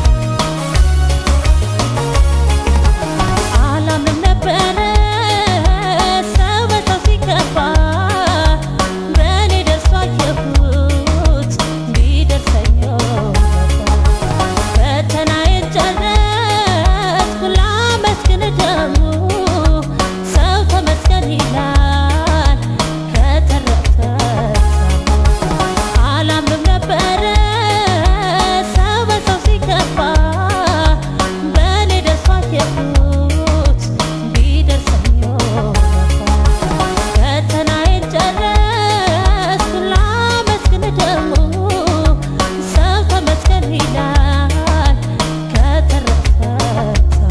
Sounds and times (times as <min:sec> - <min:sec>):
Soundtrack music: 0:00.0 - 0:04.8, 0:13.1 - 0:14.9, 0:24.3 - 0:26.3, 0:35.4 - 0:37.5.